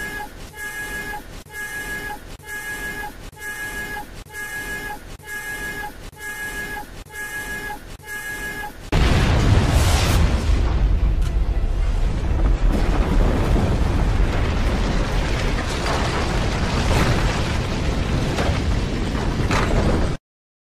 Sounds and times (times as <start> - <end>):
Sound effect: 0.0 - 16.2.